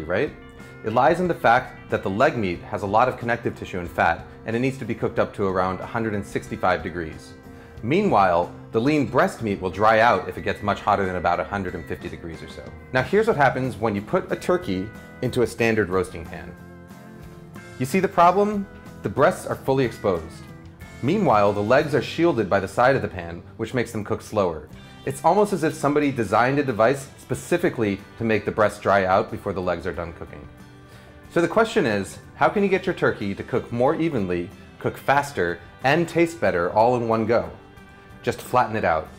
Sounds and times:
Speech: 0.0s - 16.6s, 17.8s - 30.5s, 31.3s - 37.6s, 38.2s - 39.1s
Music: 0.0s - 39.1s.

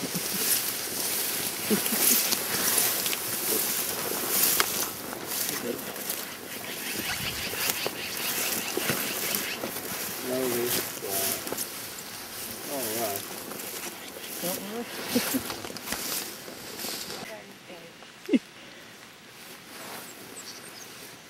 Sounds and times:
Animal: 5.4s - 11.4s, 12.8s - 15.5s.

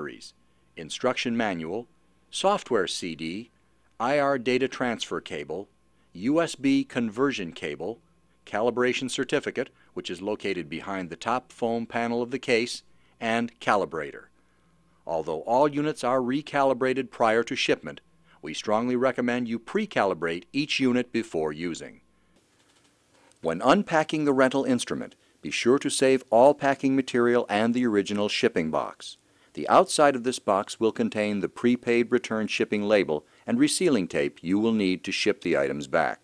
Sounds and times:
Speech: 0.0s - 14.3s, 15.1s - 22.0s, 23.4s - 36.2s.

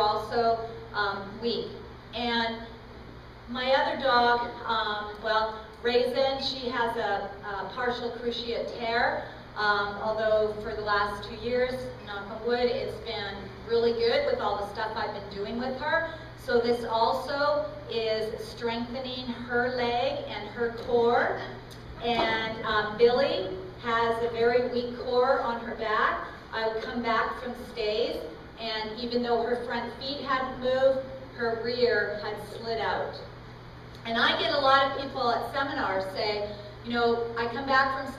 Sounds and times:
Speech: 0.0s - 2.6s, 3.5s - 33.3s, 34.0s - 38.1s.

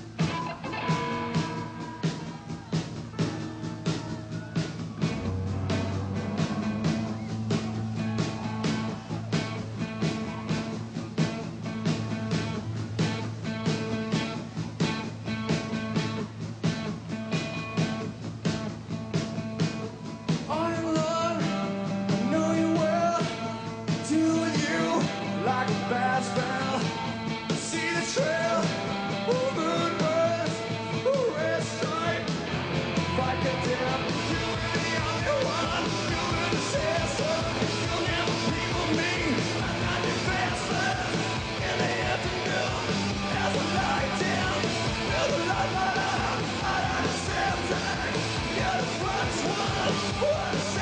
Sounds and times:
Music: 0.0s - 50.8s.

